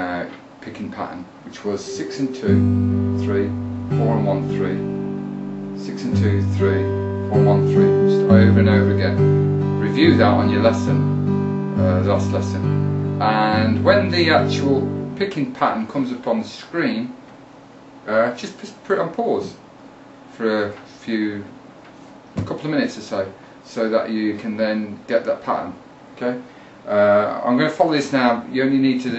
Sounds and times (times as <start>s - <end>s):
Speech: 0.0s - 2.6s, 3.2s - 4.9s, 5.8s - 9.2s, 9.8s - 11.0s, 11.8s - 17.2s, 18.0s - 19.6s, 20.3s - 21.6s, 22.4s - 29.1s
Strum: 1.9s - 15.3s.